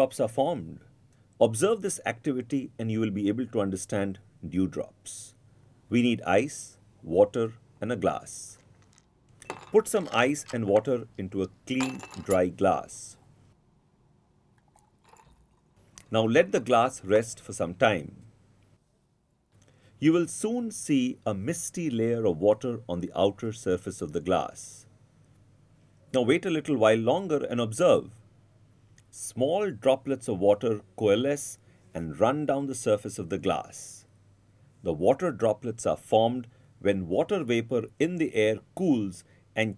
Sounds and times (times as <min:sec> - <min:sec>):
Speech: 0:00.0 - 0:08.6, 0:09.7 - 0:13.2, 0:16.1 - 0:18.3, 0:20.0 - 0:24.9, 0:26.1 - 0:28.2, 0:29.1 - 0:34.1, 0:34.8 - 0:39.7.